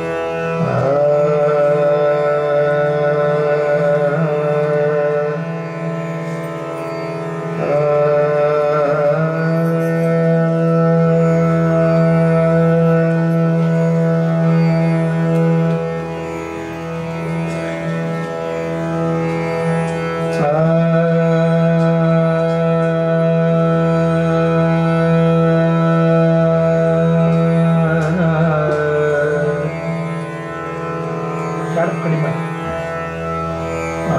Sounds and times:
Traditional music: 0.0s - 34.1s.

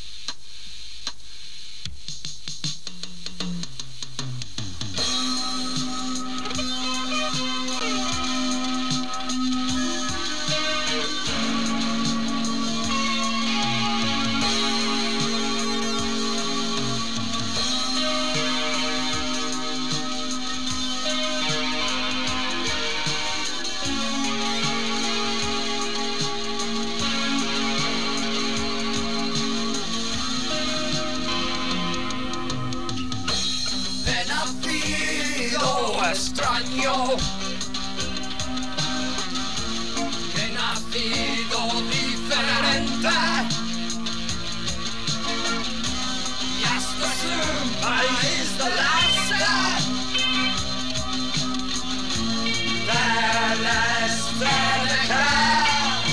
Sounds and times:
Music: 0.0s - 56.1s.

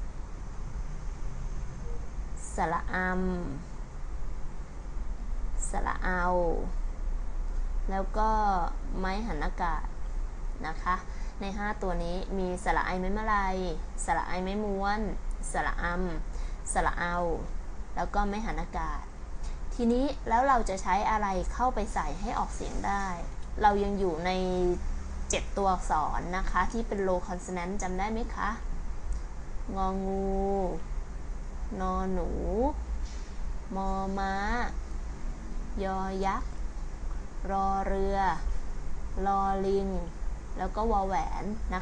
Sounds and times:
Speech: 2.4s - 3.7s, 5.6s - 6.8s, 7.9s - 9.9s, 10.6s - 19.1s, 19.7s - 28.6s, 29.7s - 30.8s, 31.7s - 32.8s, 33.7s - 34.8s, 35.8s - 36.4s, 37.4s - 38.5s, 39.2s - 41.8s.

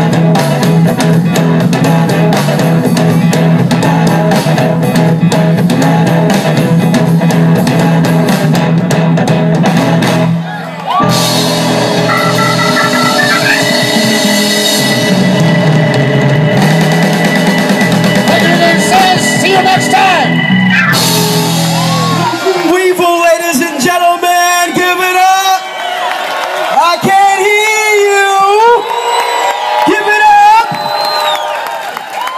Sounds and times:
Outside, urban or manmade: 0.0s - 18.5s
Music: 0.0s - 25.4s
Speech: 18.3s - 20.3s, 22.4s - 25.6s, 26.8s - 28.8s, 29.9s - 30.7s.

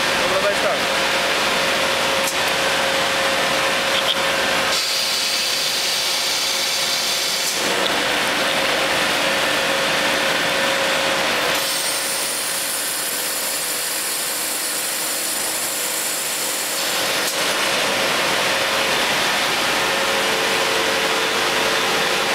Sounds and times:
Drill: 2.2s - 22.3s.

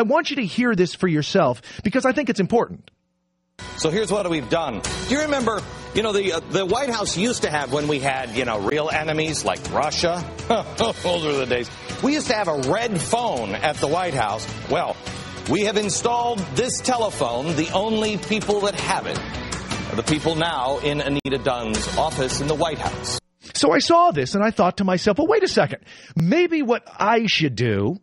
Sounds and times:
Speech: 0.0s - 2.9s, 20.0s - 28.0s
Music: 3.6s - 23.2s.

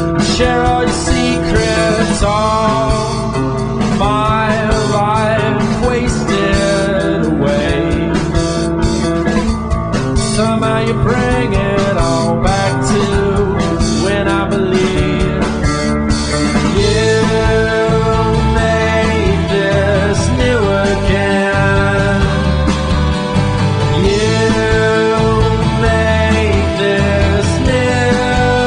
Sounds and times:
Soul music: 0.0s - 28.6s.

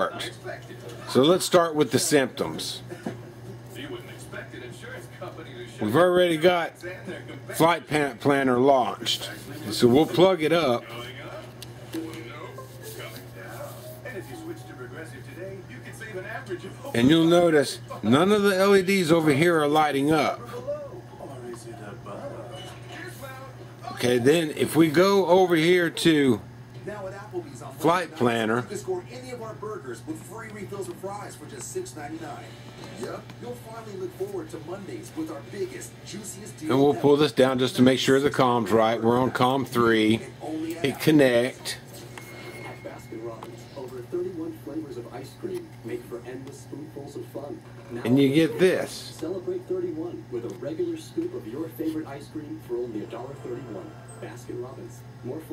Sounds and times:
Speech: 0.0s - 3.0s, 3.7s - 41.9s, 43.0s - 55.5s
Music: 11.0s - 17.0s.

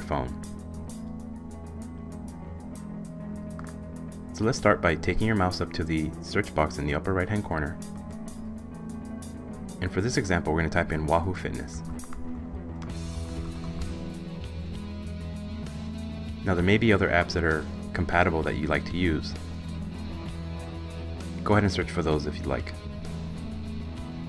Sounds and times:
Speech: 0.0s - 0.4s, 4.4s - 7.8s, 9.8s - 11.8s, 16.4s - 19.4s, 21.4s - 22.8s
Music: 0.0s - 24.2s.

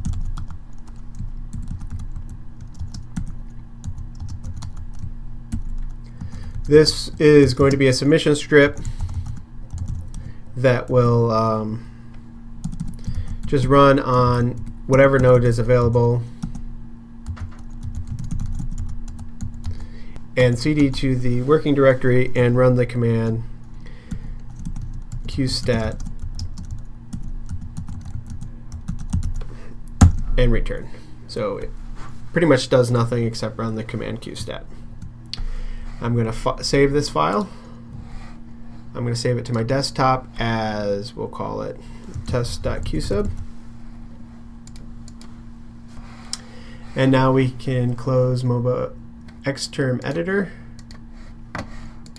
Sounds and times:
Computer keyboard: 0.0s - 6.7s, 9.0s - 10.3s, 12.6s - 13.4s, 17.3s - 19.8s, 24.2s - 29.5s.

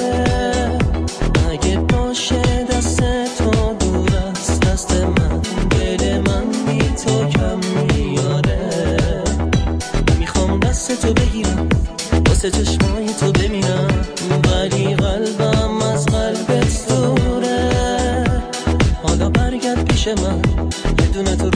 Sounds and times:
Music: 0.0s - 21.5s.

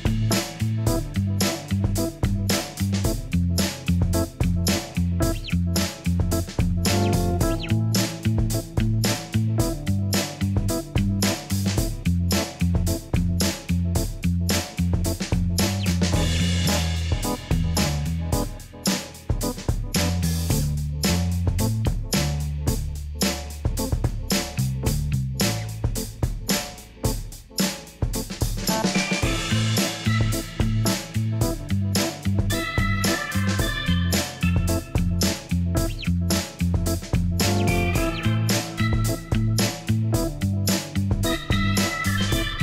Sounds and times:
Music: 0.0s - 42.6s.

